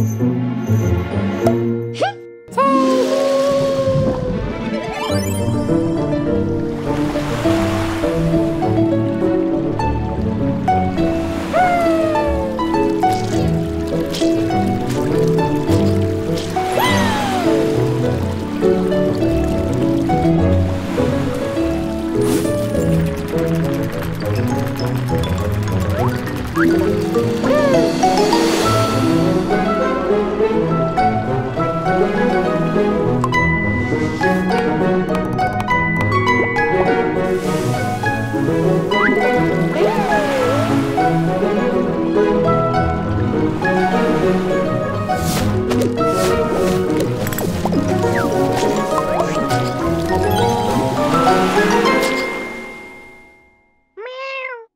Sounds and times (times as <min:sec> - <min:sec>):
Music: 0:00.0 - 0:53.9
Gurgling: 0:11.4 - 0:29.4, 0:38.9 - 0:41.2, 0:45.4 - 0:52.5.